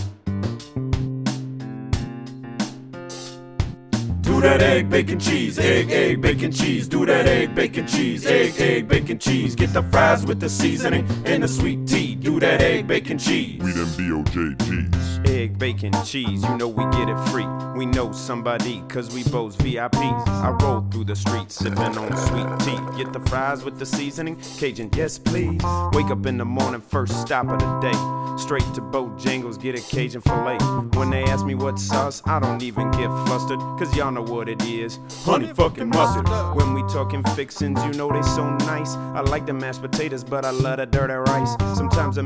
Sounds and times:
Jazz: 4.0 - 11.4
Pop music: 4.3 - 14.9, 21.6 - 25.2, 35.2 - 38.8, 41.3 - 42.1.

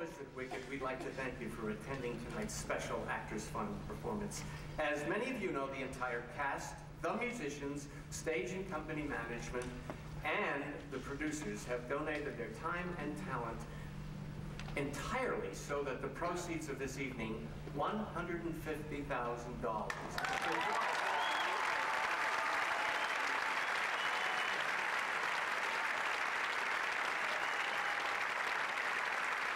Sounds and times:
Male speech, man speaking: 0.0 - 13.6, 14.8 - 19.9
Narration, monologue: 0.0 - 20.1.

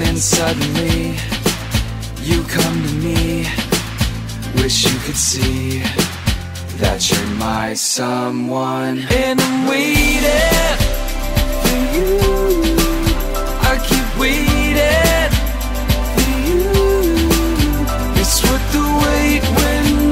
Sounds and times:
Music: 0.0 - 20.1.

